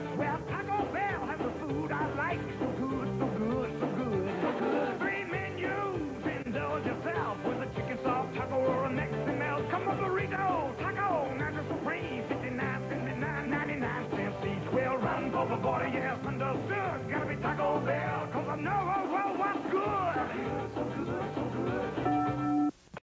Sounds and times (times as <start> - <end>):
Music: 0.0 - 22.8.